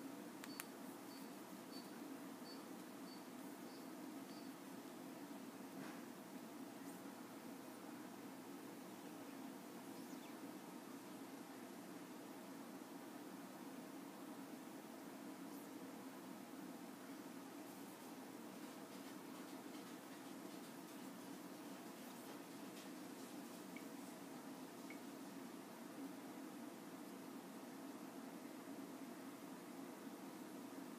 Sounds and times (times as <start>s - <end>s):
Inside, small room: 0.0s - 30.9s.